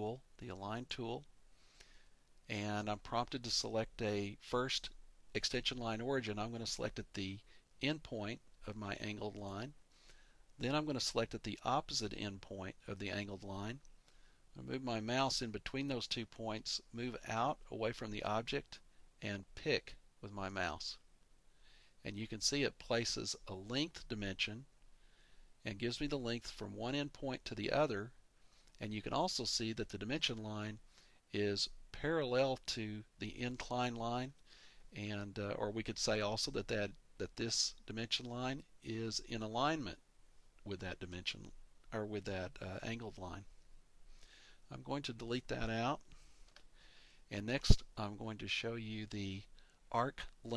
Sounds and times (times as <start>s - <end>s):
Speech: 0.0s - 1.3s, 2.5s - 9.8s, 10.6s - 13.9s, 14.6s - 21.1s, 22.0s - 24.7s, 25.6s - 28.2s, 28.8s - 40.0s, 40.6s - 43.5s, 44.7s - 46.0s, 47.3s - 50.5s.